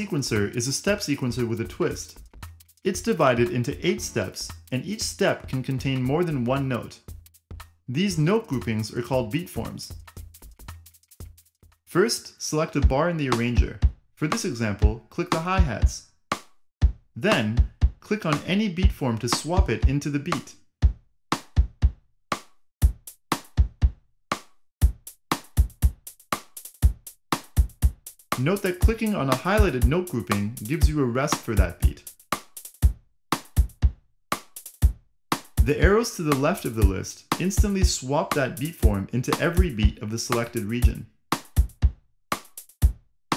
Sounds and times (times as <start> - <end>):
Speech: 0.0 - 2.2, 2.9 - 7.0, 7.9 - 10.0, 11.9 - 16.0, 17.2 - 20.6, 28.4 - 32.1, 35.6 - 41.1
Music: 0.0 - 43.3.